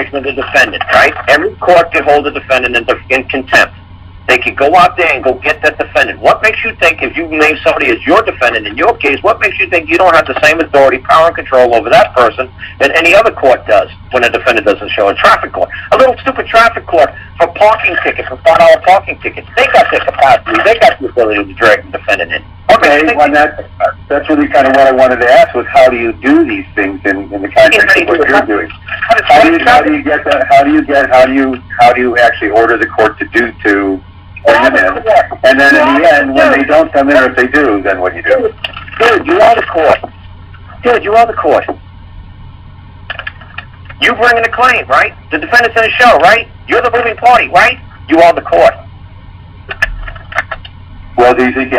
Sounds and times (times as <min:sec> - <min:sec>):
Speech: 0:00.0 - 0:03.7, 0:04.3 - 0:40.1, 0:40.7 - 0:41.8, 0:43.9 - 0:48.9, 0:51.2 - 0:51.7.